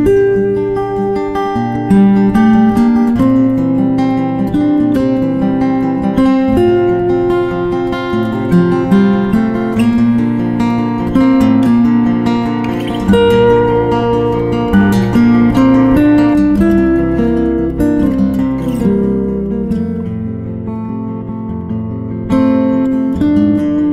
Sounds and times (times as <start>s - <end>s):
Strum: 0.0s - 23.9s.